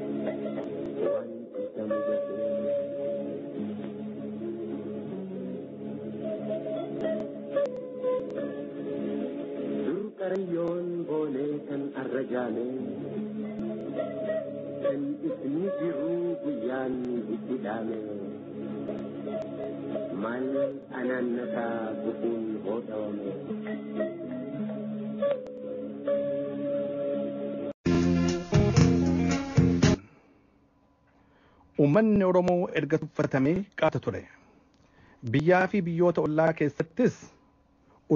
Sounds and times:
Music: 0.0 - 30.3.

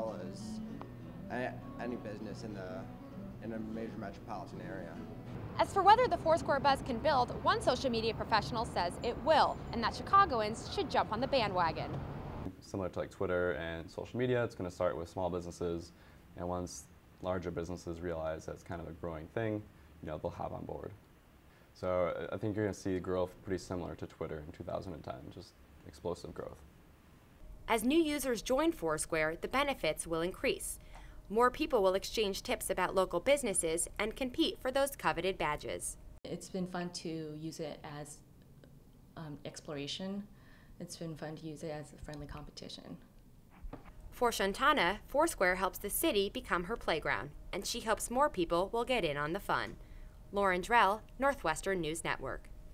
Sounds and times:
Speech: 3.4 - 5.0, 21.8 - 26.6, 31.4 - 38.2.

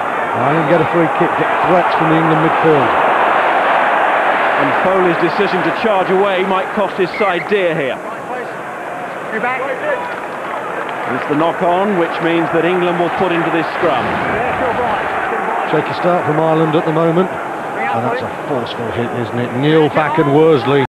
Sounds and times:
Speech: 0.3 - 3.0, 4.6 - 8.5, 11.1 - 20.9.

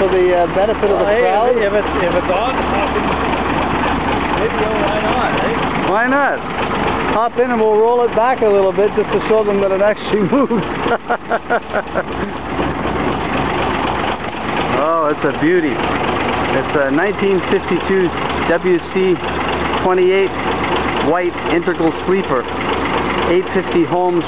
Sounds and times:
Truck: 0.0 - 24.2
Speech: 4.4 - 6.4, 7.1 - 10.2, 16.6 - 19.2, 19.8 - 20.3, 21.0 - 22.5, 23.3 - 24.2.

